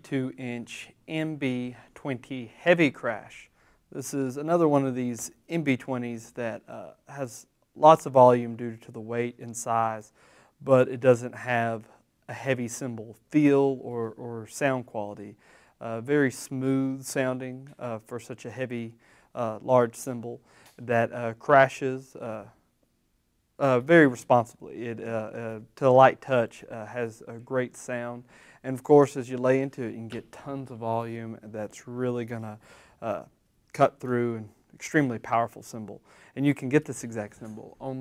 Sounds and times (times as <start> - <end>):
Speech: 0.0 - 22.6, 23.6 - 38.0.